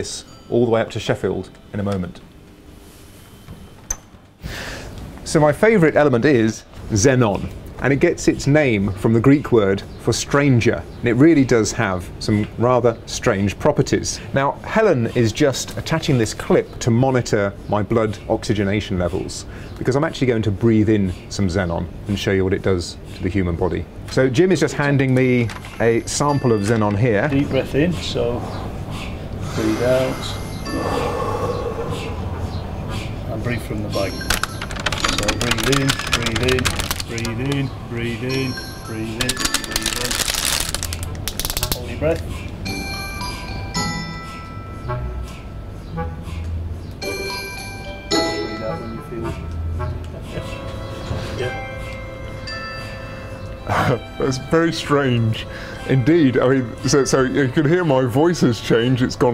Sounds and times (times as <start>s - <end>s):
Computer keyboard: 34.3s - 37.7s, 39.2s - 41.8s.